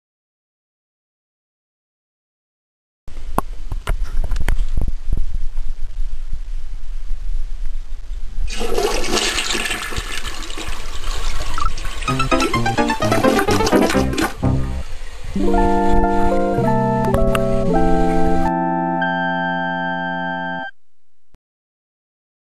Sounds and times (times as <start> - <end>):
Music: 12.1 - 20.7.